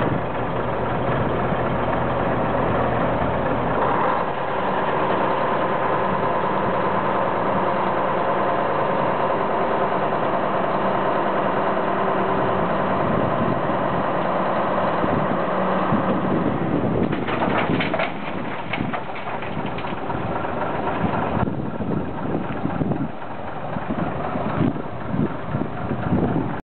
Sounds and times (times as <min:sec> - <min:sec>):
Truck: 0:00.0 - 0:26.6.